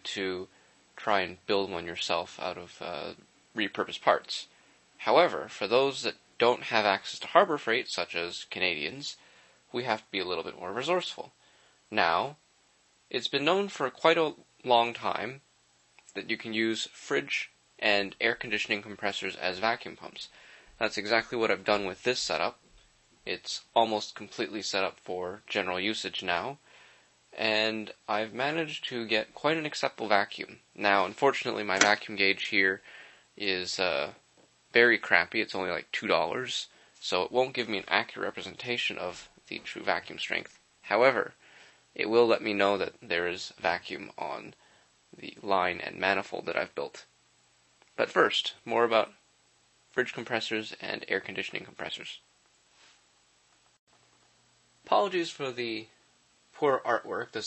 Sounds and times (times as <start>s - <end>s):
Speech: 0.0s - 12.4s, 13.1s - 15.5s, 16.1s - 22.6s, 23.2s - 26.7s, 27.4s - 41.4s, 42.0s - 44.6s, 45.2s - 47.1s, 48.0s - 49.2s, 50.0s - 52.3s, 54.8s - 56.0s, 56.6s - 57.4s.